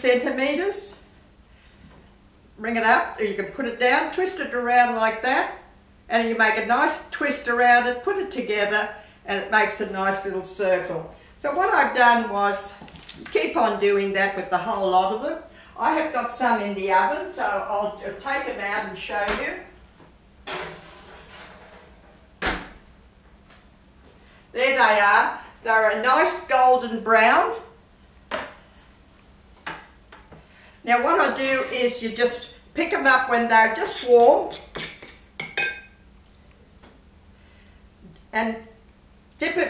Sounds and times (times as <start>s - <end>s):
Speech: 0.0s - 1.0s, 2.6s - 19.8s, 24.6s - 27.7s, 30.9s - 34.7s, 38.3s - 38.8s, 39.4s - 39.6s
Inside, small room: 0.0s - 39.6s.